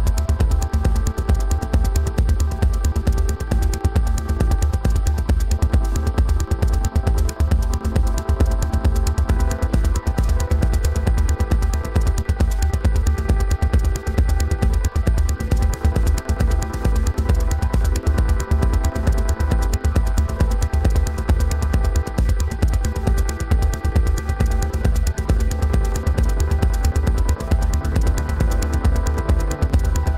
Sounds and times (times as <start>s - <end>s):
Music: 0.0s - 30.1s.